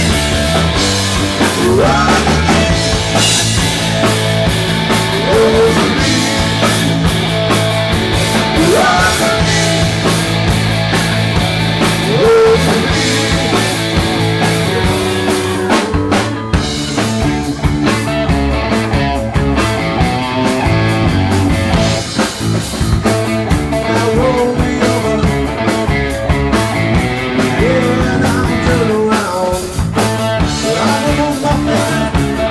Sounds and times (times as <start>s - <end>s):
Rock and roll: 0.0s - 32.5s.